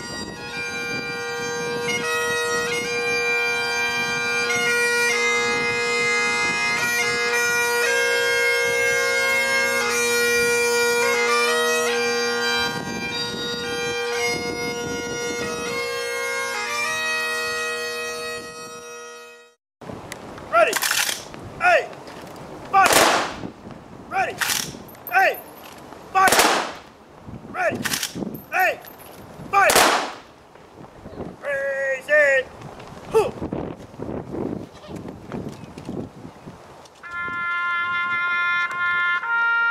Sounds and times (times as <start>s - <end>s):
Bagpipes: 0.0s - 19.6s, 37.0s - 39.7s
Wind instrument, woodwind instrument: 0.0s - 19.6s, 37.0s - 39.7s.